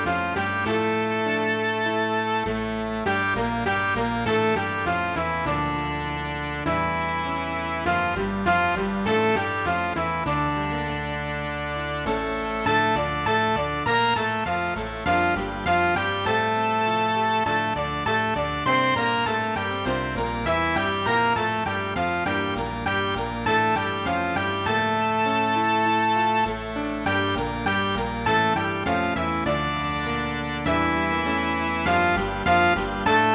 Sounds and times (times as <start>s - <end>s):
Sad music: 0.0s - 33.3s.